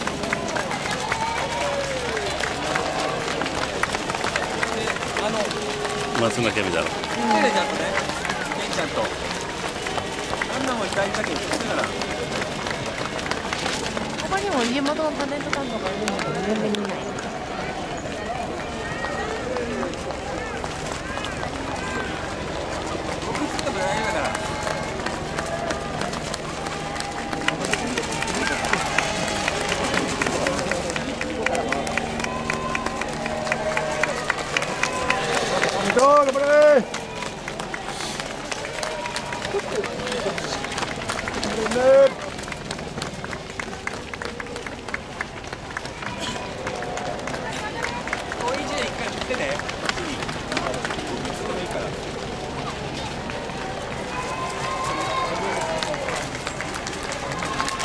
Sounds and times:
Outside, urban or manmade: 0.0s - 57.8s.

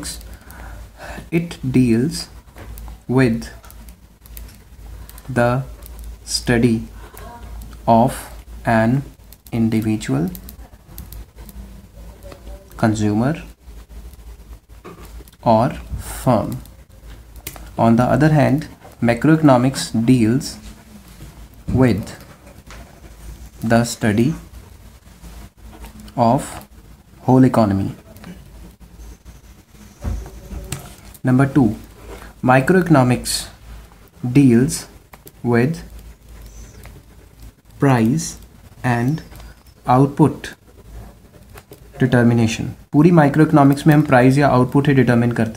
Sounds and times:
Inside, small room: 0.0s - 45.5s
Speech: 1.2s - 2.3s, 3.1s - 3.6s, 5.3s - 5.7s, 6.3s - 11.0s, 11.9s - 13.6s, 15.4s - 16.7s, 17.8s - 20.7s, 21.7s - 22.3s, 23.6s - 24.4s, 26.1s - 26.6s, 27.2s - 28.4s, 30.2s - 33.6s, 34.2s - 35.9s, 37.8s - 39.3s, 39.9s - 40.6s, 42.0s - 45.5s.

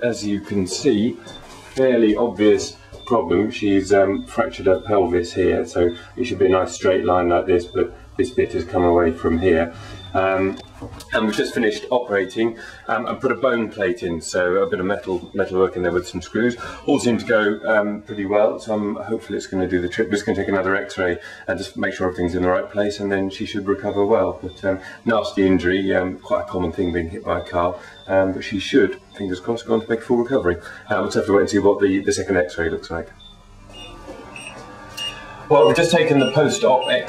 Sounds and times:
Speech: 0.0s - 33.2s, 35.5s - 37.0s.

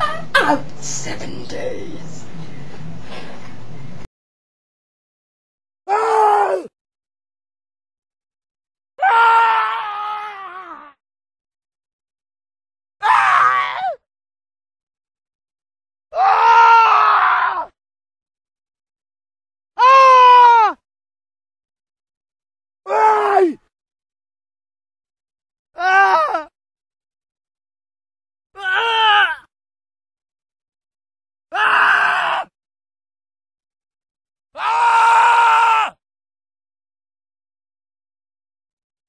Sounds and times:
Groan: 5.9s - 6.7s, 9.0s - 11.0s, 13.0s - 14.0s, 16.2s - 17.7s, 22.9s - 23.6s, 25.8s - 26.5s, 28.6s - 29.5s, 31.6s - 32.5s, 34.6s - 36.0s.

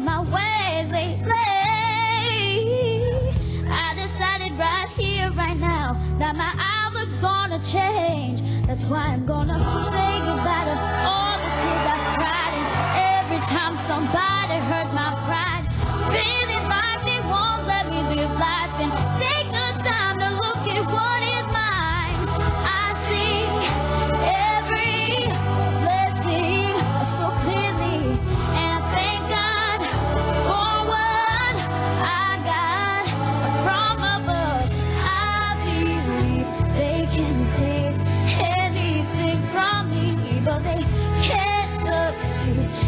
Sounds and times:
Female singing: 0.0s - 42.8s
Music: 0.0s - 42.8s.

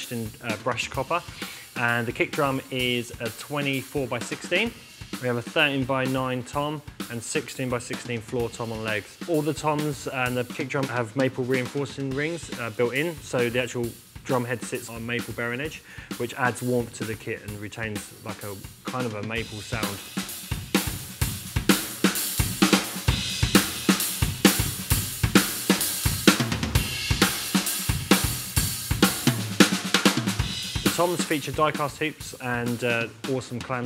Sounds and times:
Speech: 0.0s - 20.0s, 30.9s - 33.8s
Drum: 0.0s - 33.8s
Drum kit: 0.0s - 33.8s.

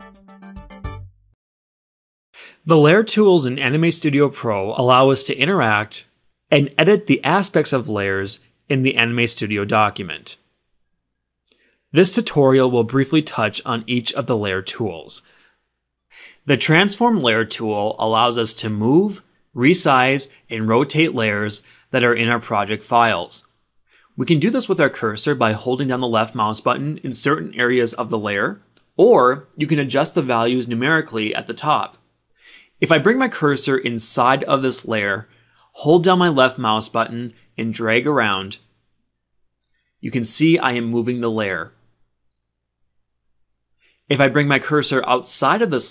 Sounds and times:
Speech: 2.6s - 10.5s, 11.9s - 15.3s, 16.3s - 23.5s, 24.2s - 32.0s, 32.7s - 38.7s, 40.0s - 41.8s, 44.1s - 45.9s.

